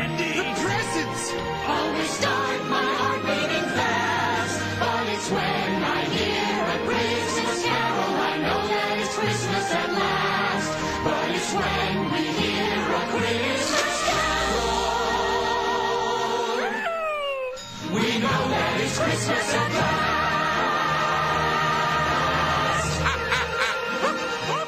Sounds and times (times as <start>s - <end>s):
Christmas music: 0.0s - 24.6s.